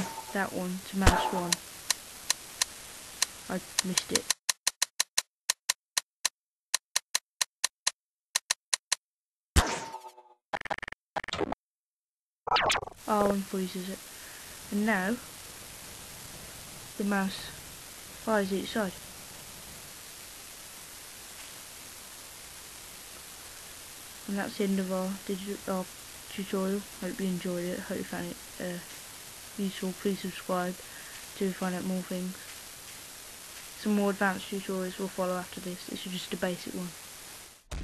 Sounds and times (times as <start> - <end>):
Speech: 0.0 - 1.6, 3.5 - 4.3, 13.1 - 14.0, 14.7 - 15.2, 17.0 - 17.6, 18.3 - 19.0, 24.3 - 28.9, 29.6 - 32.5, 33.8 - 37.0.